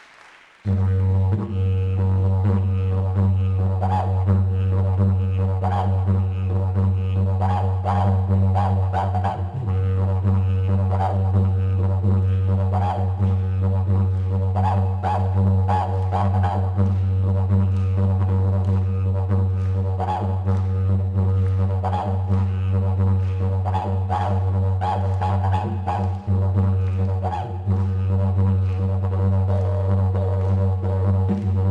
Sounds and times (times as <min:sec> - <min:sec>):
Didgeridoo: 0:00.7 - 0:31.7.